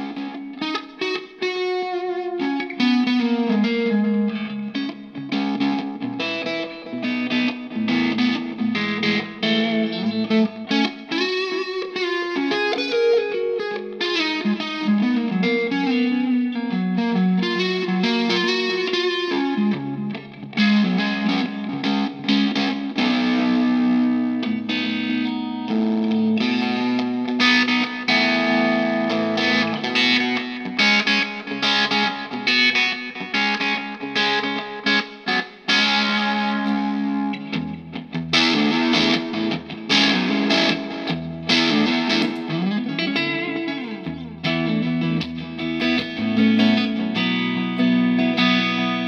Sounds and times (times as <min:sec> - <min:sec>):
Distortion: 0:00.0 - 0:49.0
Electric guitar: 0:00.0 - 0:49.0.